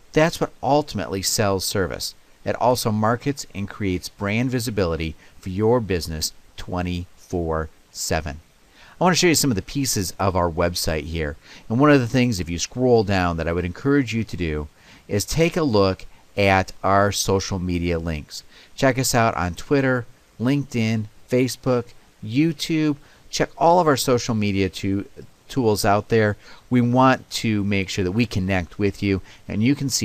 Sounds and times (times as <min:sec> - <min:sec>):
Speech: 0:00.1 - 0:08.4, 0:09.0 - 0:30.0.